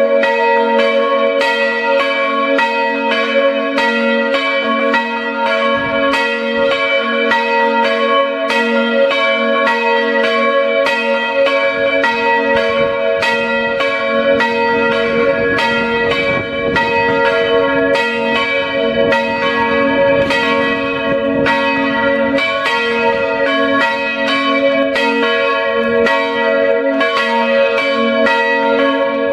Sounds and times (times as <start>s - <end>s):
Bell: 0.0s - 29.3s.